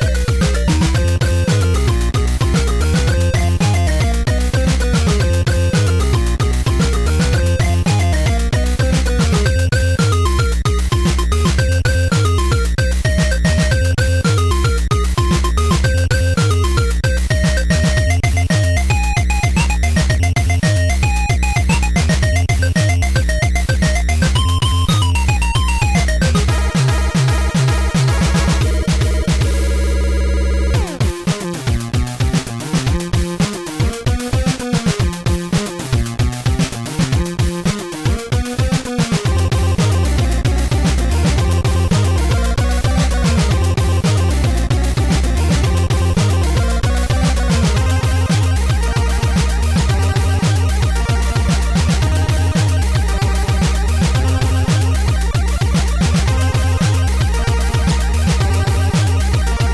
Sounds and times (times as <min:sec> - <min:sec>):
Theme music: 0:00.0 - 0:31.2, 0:39.5 - 0:59.7.